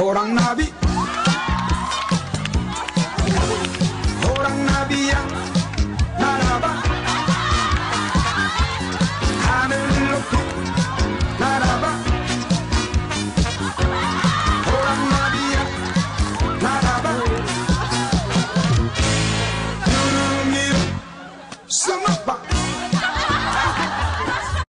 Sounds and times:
Music: 0.0 - 24.7.

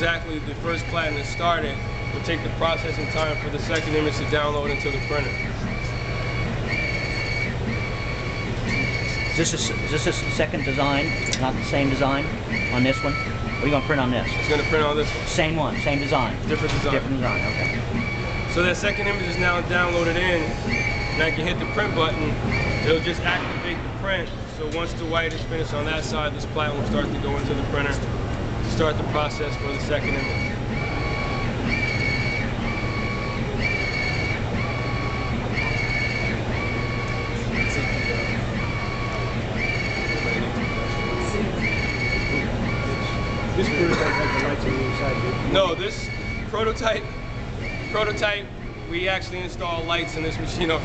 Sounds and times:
Printer: 0.0 - 50.8.

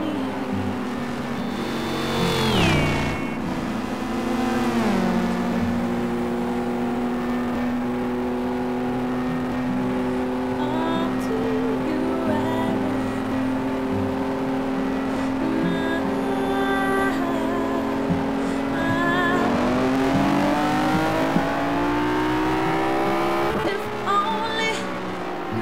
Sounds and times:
Car: 0.0 - 25.6.

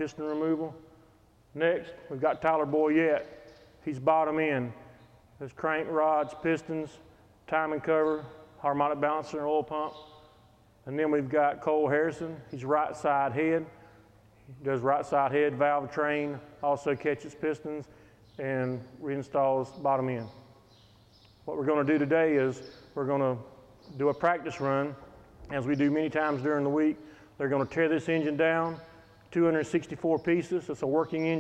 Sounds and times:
Speech: 0.0 - 0.8, 1.6 - 4.8, 5.4 - 10.0, 10.9 - 13.8, 14.5 - 20.4, 21.5 - 31.4.

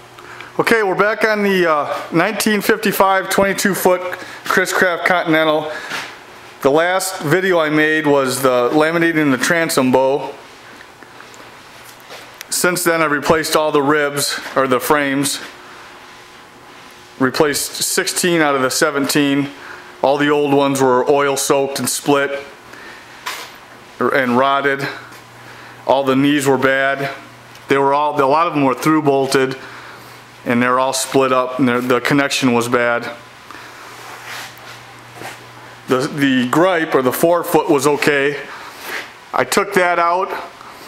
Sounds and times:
Speech: 0.6 - 5.8, 6.6 - 10.4, 12.5 - 15.6, 17.2 - 22.6, 24.0 - 25.1, 25.8 - 29.7, 30.4 - 33.2, 35.9 - 38.6, 39.3 - 40.6.

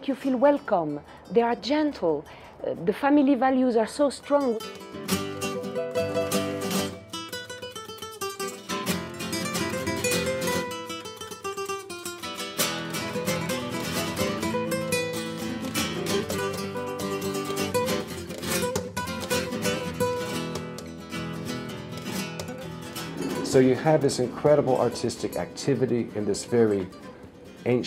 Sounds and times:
Flamenco: 4.3 - 27.8.

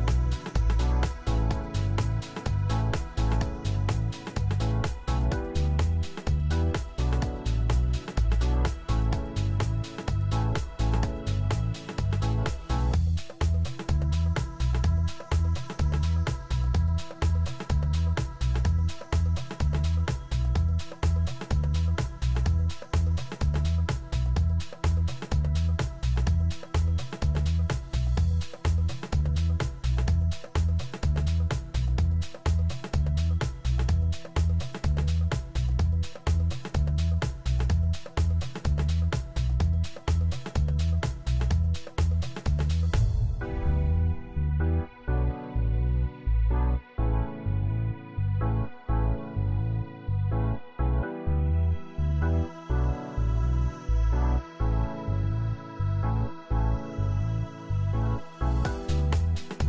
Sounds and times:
Music: 0.0 - 59.6.

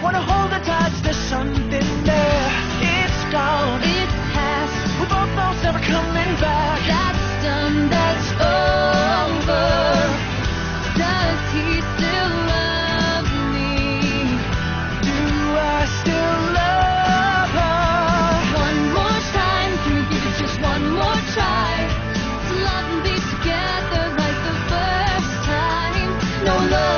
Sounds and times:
Male singing: 0.0 - 10.3, 11.0 - 14.4, 15.0 - 21.9, 22.6 - 26.9
Music: 0.0 - 26.9
Female singing: 5.9 - 10.3, 11.0 - 14.4, 18.5 - 26.9.

